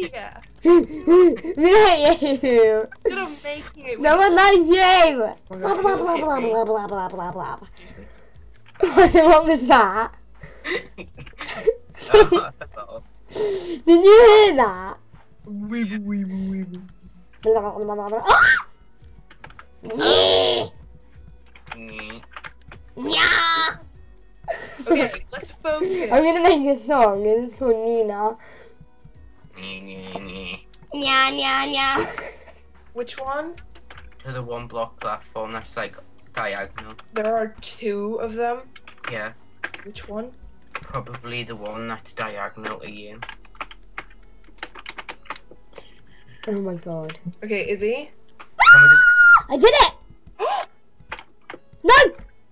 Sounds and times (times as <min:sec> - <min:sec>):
Computer keyboard: 0:00.1 - 0:05.6, 0:19.2 - 0:19.7, 0:21.5 - 0:22.8, 0:33.2 - 0:34.3, 0:36.3 - 0:37.3, 0:38.8 - 0:41.3, 0:42.6 - 0:47.2, 0:51.0 - 0:51.7.